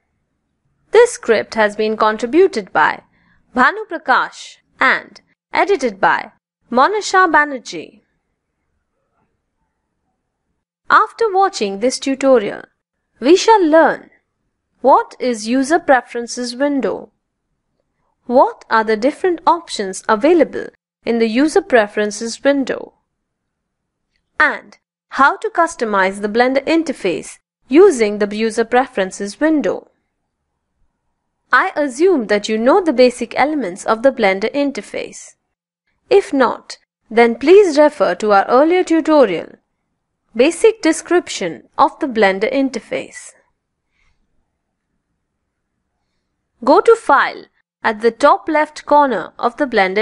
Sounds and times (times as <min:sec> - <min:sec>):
Speech: 0:00.9 - 0:03.0, 0:03.6 - 0:08.0, 0:10.9 - 0:14.2, 0:14.8 - 0:17.1, 0:18.3 - 0:23.0, 0:24.4 - 0:29.9, 0:31.5 - 0:35.4, 0:36.1 - 0:39.6, 0:40.4 - 0:43.4, 0:46.6 - 0:50.0.